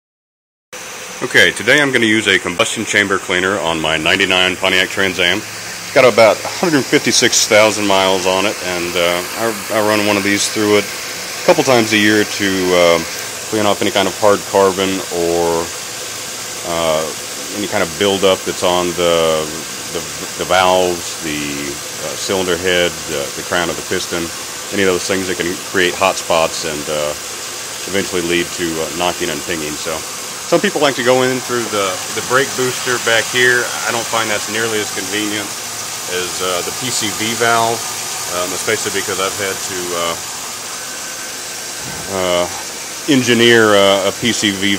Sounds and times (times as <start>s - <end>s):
Engine: 0.8s - 44.7s.